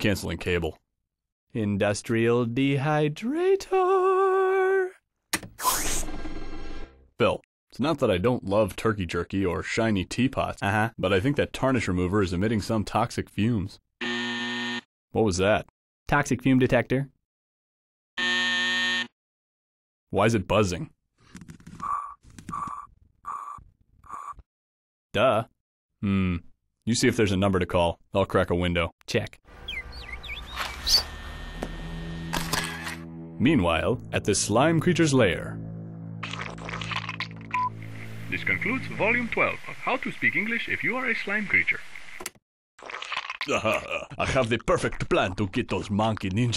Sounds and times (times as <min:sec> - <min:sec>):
Speech: 0:00.0 - 0:00.8, 0:01.5 - 0:05.0, 0:07.2 - 0:13.8, 0:15.2 - 0:17.2, 0:20.1 - 0:20.9, 0:25.2 - 0:29.4, 0:33.4 - 0:35.6, 0:38.3 - 0:41.8, 0:43.5 - 0:46.5
Music: 0:31.8 - 0:40.4.